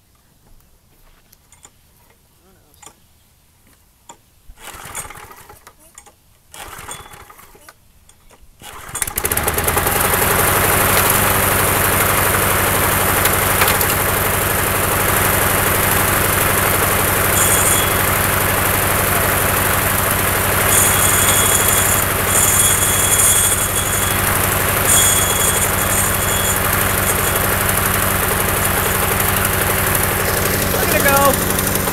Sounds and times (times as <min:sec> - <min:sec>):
Lawn mower: 0:04.6 - 0:05.8, 0:06.5 - 0:07.6, 0:08.6 - 0:31.9
Idling: 0:09.2 - 0:31.9.